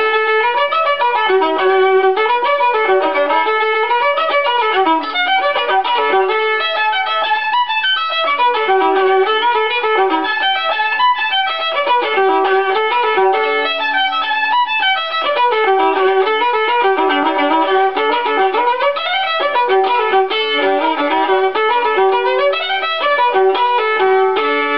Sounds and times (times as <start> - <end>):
Violin, fiddle: 0.0 - 24.7.